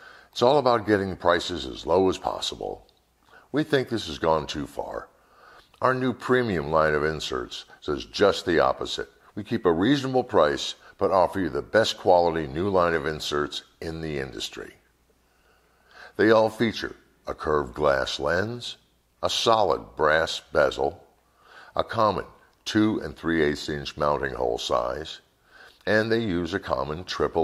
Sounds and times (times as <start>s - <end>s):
Speech: 0.4s - 5.2s, 5.8s - 14.9s, 16.1s - 21.1s, 21.7s - 27.4s.